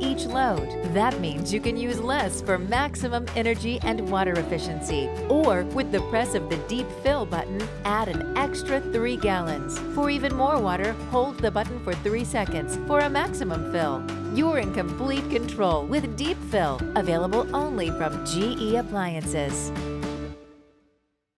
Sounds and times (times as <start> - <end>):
Speech: 0.0 - 19.7
Music: 0.0 - 21.3.